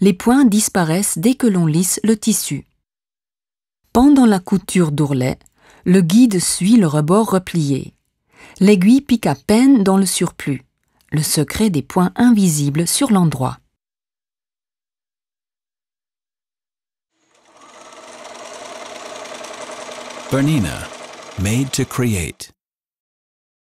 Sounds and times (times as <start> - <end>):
Speech: 0.0 - 2.7, 4.0 - 7.9, 8.6 - 10.6, 11.2 - 13.6, 20.4 - 22.6.